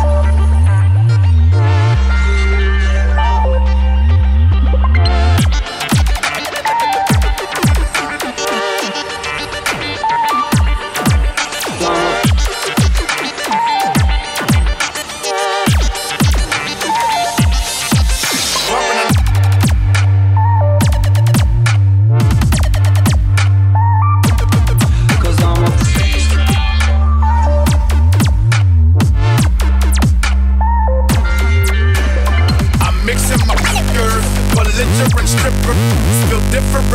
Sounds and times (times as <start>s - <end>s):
Dubstep: 0.0s - 36.9s.